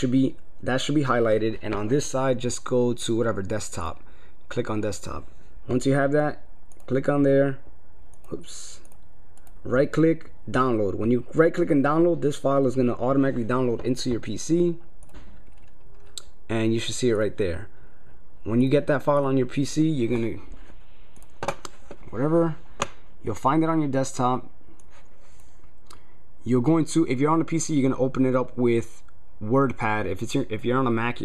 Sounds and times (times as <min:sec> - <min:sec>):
Speech: 0:00.0 - 0:07.6, 0:08.3 - 0:08.9, 0:09.6 - 0:14.8, 0:16.5 - 0:17.7, 0:18.4 - 0:20.5, 0:22.1 - 0:22.6, 0:23.2 - 0:24.5, 0:26.4 - 0:31.2.